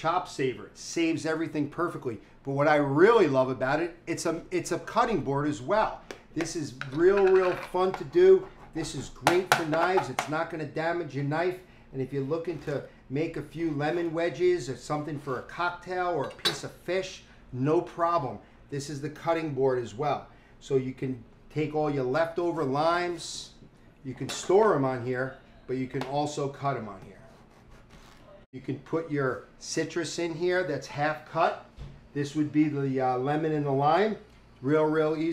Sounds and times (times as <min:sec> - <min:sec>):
Speech: 0:00.0 - 0:27.3, 0:28.6 - 0:35.3.